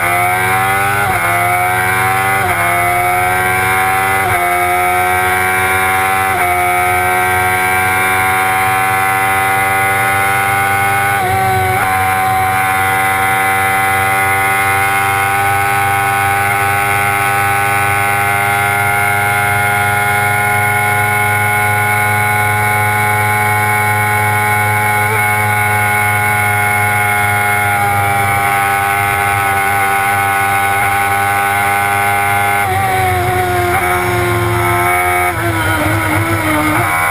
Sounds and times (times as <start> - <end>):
Car: 0.0 - 37.1.